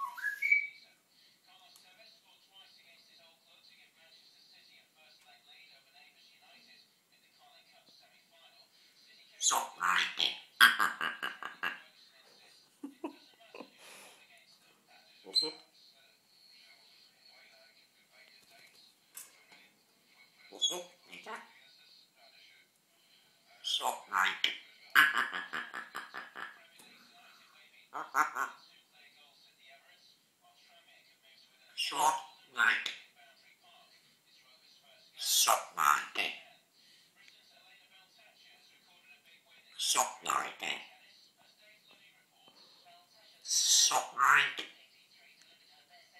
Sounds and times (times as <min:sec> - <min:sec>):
Inside, small room: 0:00.0 - 0:46.1.